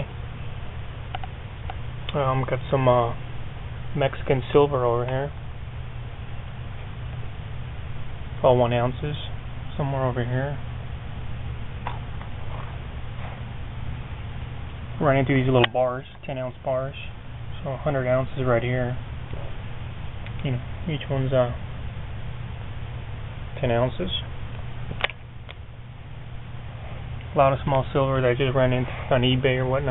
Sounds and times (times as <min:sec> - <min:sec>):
Speech: 0:02.1 - 0:03.2, 0:03.9 - 0:05.4, 0:08.4 - 0:10.6, 0:15.0 - 0:19.0, 0:20.4 - 0:21.6, 0:23.6 - 0:24.3, 0:27.3 - 0:29.9.